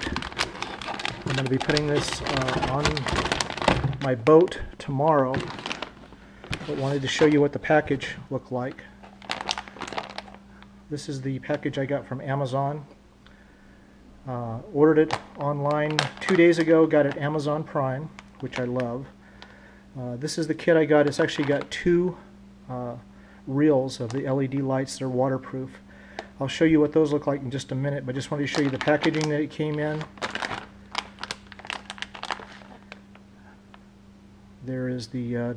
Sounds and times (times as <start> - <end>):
Speech: 1.2 - 3.1, 4.0 - 5.5, 6.6 - 8.9, 10.9 - 13.0, 14.3 - 19.2, 20.0 - 25.8, 26.4 - 30.1, 34.6 - 35.5.